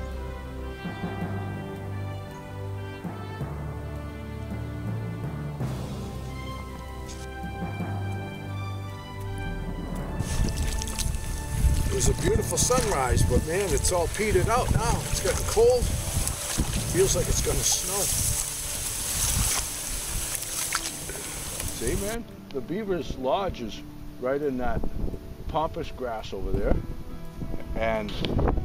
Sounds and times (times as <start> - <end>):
Music: 0.0 - 28.6
Outside, rural or natural: 0.0 - 28.6
Speech: 11.9 - 15.9, 16.9 - 18.1, 21.8 - 24.8, 25.5 - 26.8, 27.8 - 28.3.